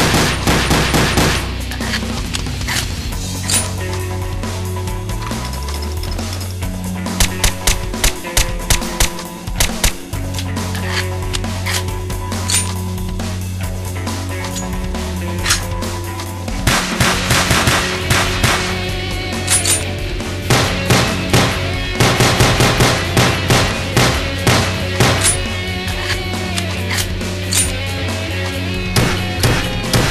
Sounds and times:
Music: 0.0s - 30.1s.

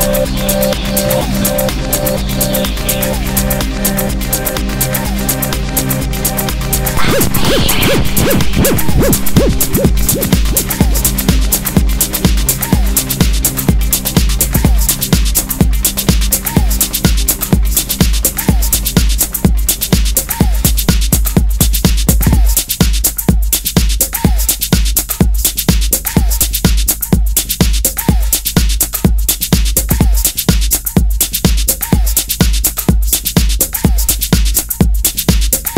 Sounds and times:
Techno: 0.0s - 35.7s.

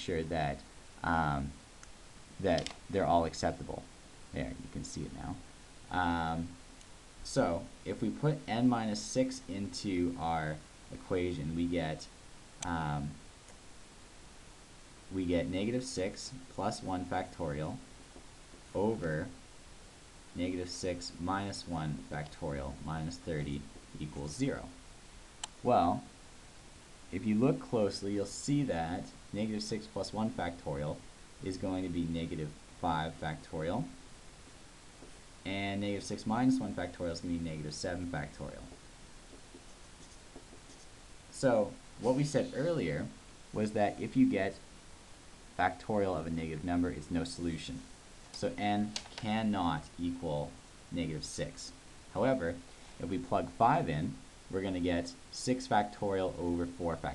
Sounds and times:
Speech: 0.0s - 1.6s, 2.4s - 6.6s, 7.2s - 13.2s, 15.1s - 17.9s, 18.7s - 19.4s, 20.4s - 24.8s, 25.6s - 26.1s, 27.1s - 34.0s, 35.4s - 38.8s, 41.3s - 44.7s, 45.6s - 57.1s.

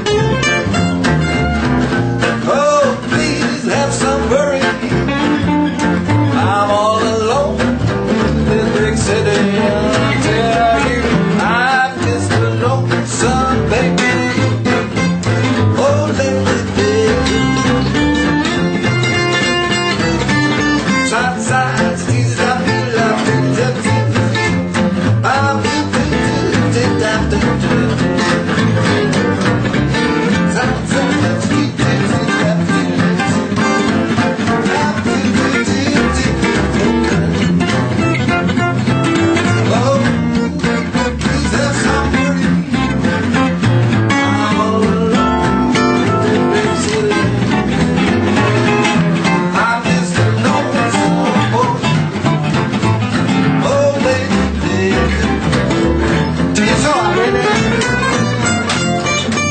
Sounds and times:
Music: 0.0s - 59.5s.

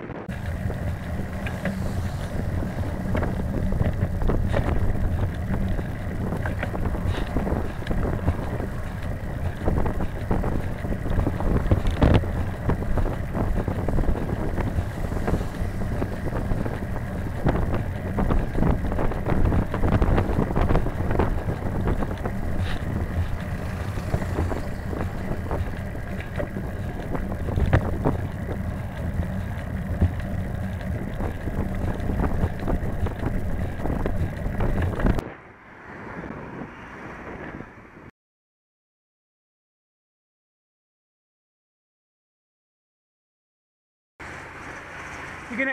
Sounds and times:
Bus: 0.0s - 38.2s, 44.2s - 45.7s.

